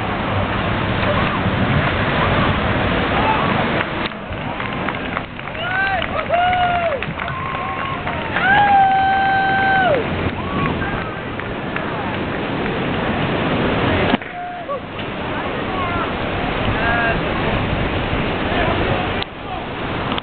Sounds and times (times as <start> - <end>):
Sailboat, sailing ship: 0.0 - 20.2
Speech: 14.4 - 17.6, 18.4 - 19.7.